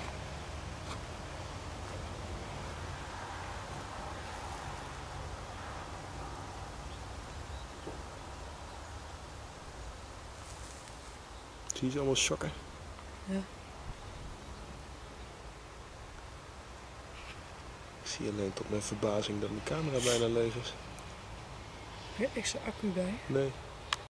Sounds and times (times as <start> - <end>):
Speech: 11.7 - 12.6, 18.0 - 20.8.